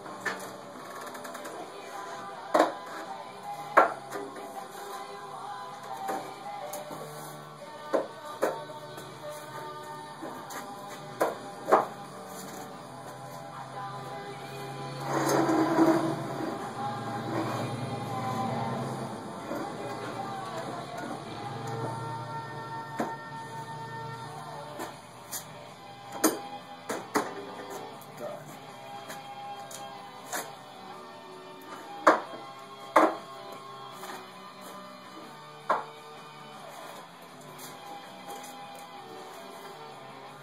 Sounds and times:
Music: 0:00.0 - 0:40.4.

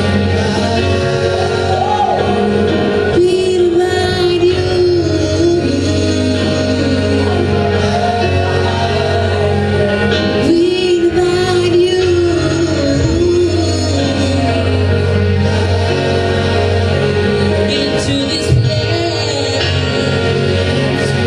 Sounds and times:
Choir: 0:00.0 - 0:21.2
Gospel music: 0:00.0 - 0:21.2.

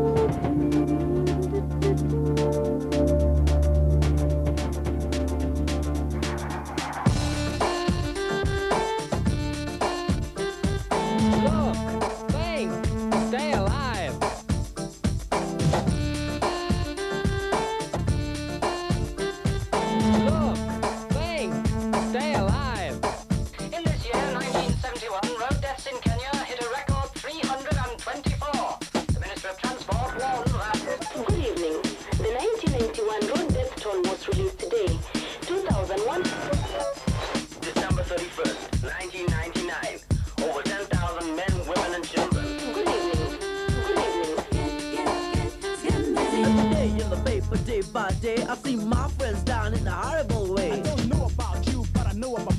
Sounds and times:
Music: 0:00.0 - 0:52.5
Speech: 0:11.4 - 0:14.2, 0:20.3 - 0:20.6, 0:21.2 - 0:23.0, 0:23.6 - 0:37.0, 0:37.6 - 0:44.5, 0:46.6 - 0:52.5.

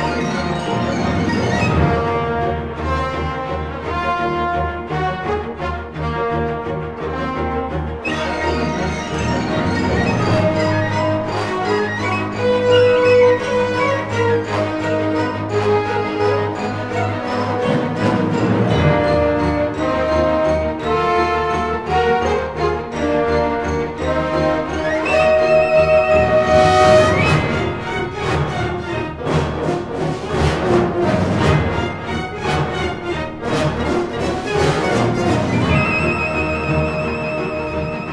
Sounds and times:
Music: 0:00.0 - 0:38.1.

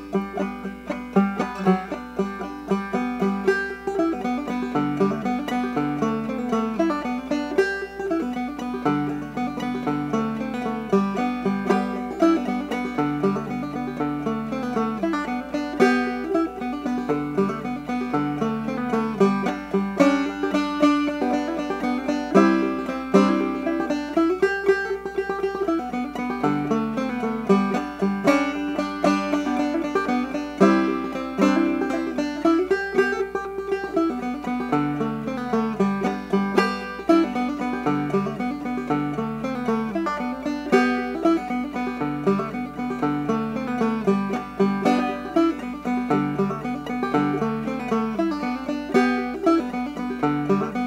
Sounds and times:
Pizzicato: 0:00.0 - 0:50.8.

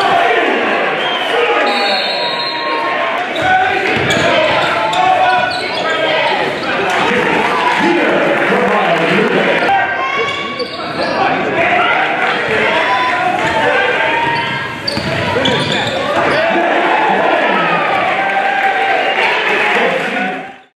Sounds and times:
Speech: 0:03.3 - 0:18.2, 0:18.8 - 0:20.6.

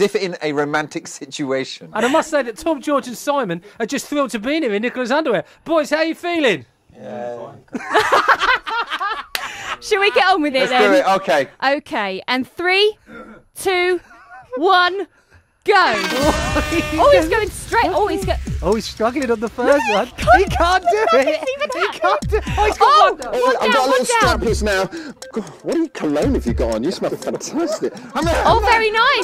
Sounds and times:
Music: 0:15.9 - 0:29.2.

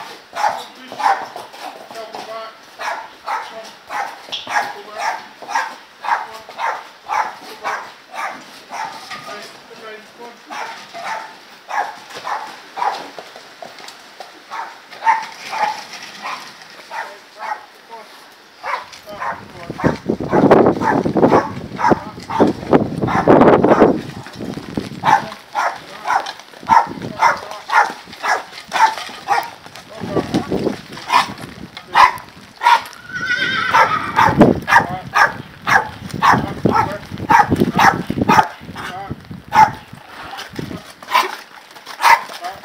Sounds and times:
Clip-clop: 0:00.0 - 0:42.6.

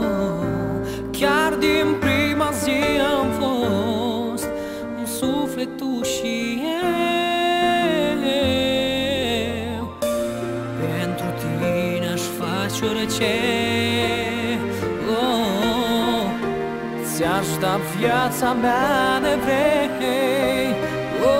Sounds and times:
Music: 0:00.0 - 0:21.3.

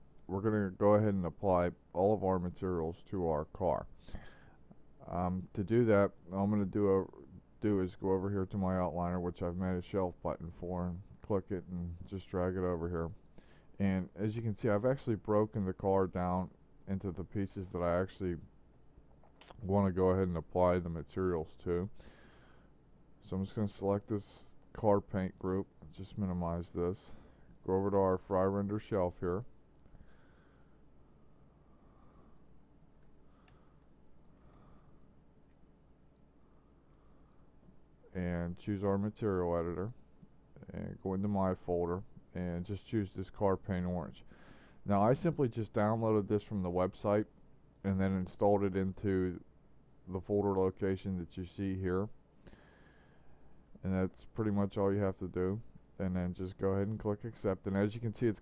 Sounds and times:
Narration, monologue: 0:00.0 - 0:58.4.

